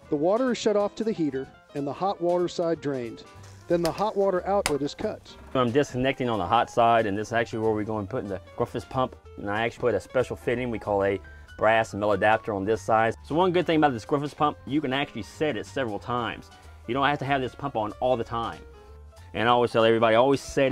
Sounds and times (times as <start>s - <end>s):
Speech: 0.0s - 18.6s, 19.4s - 20.7s
Music: 0.0s - 20.7s.